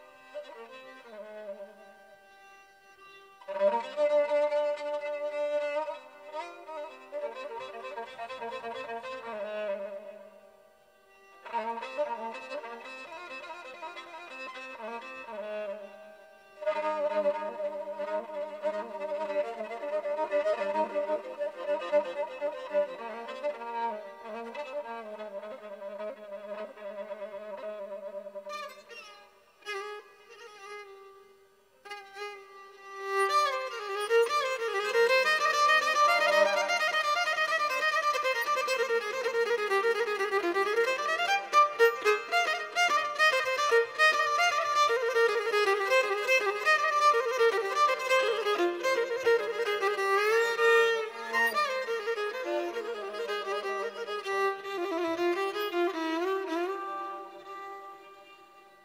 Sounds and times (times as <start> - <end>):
Bowed string instrument: 0.0 - 58.8.